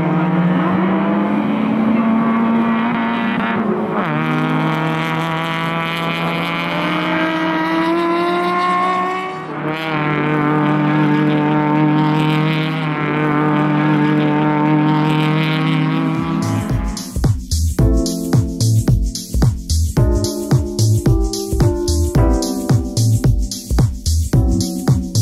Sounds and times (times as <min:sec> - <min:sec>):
Race car, auto racing: 0:00.0 - 0:17.2
Music: 0:16.2 - 0:25.2.